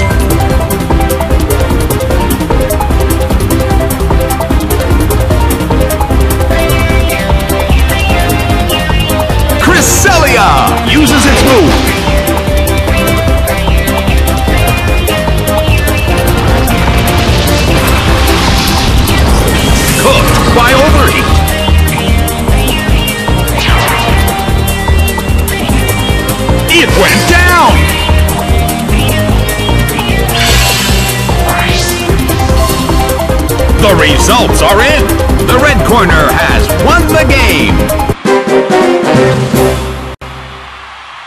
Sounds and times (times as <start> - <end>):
Music: 0.0 - 41.2
Speech: 9.6 - 11.7, 33.8 - 37.8.